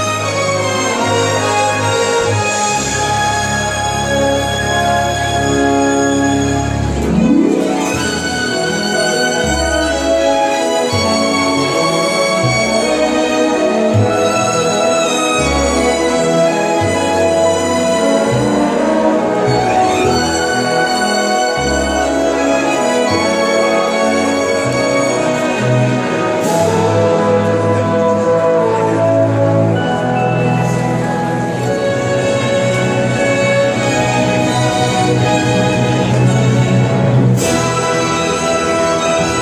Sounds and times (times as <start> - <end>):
Orchestra: 0.0 - 39.4.